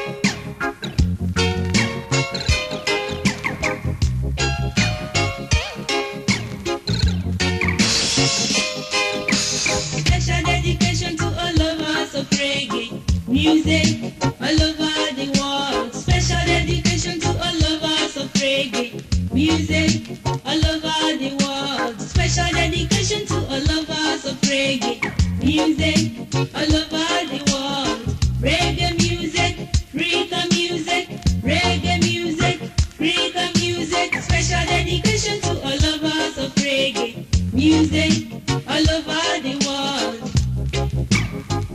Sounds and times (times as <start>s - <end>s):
Music: 0.0s - 41.7s.